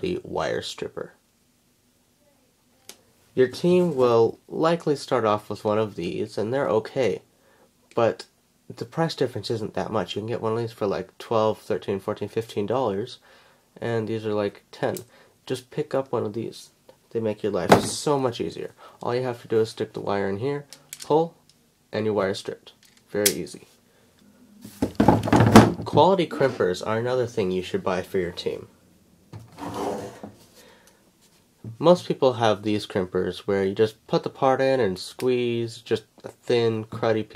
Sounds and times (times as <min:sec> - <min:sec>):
Speech: 0:00.0 - 0:01.2, 0:02.2 - 0:07.3, 0:07.9 - 0:13.2, 0:13.8 - 0:23.8, 0:25.8 - 0:28.7, 0:31.7 - 0:37.3.